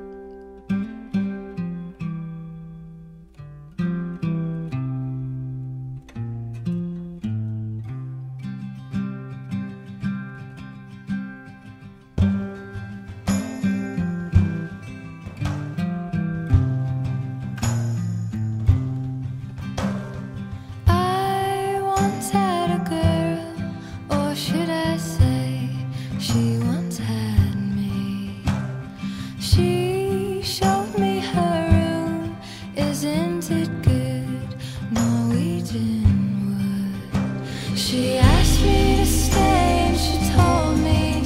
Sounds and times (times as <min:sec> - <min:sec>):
Music: 0:00.0 - 0:41.2.